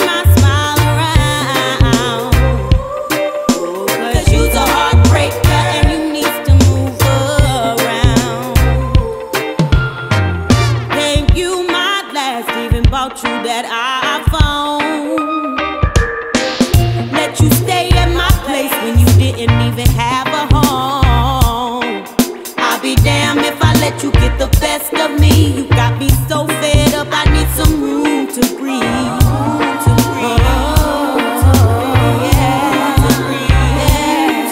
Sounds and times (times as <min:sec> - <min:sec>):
Reggae: 0:00.0 - 0:34.5.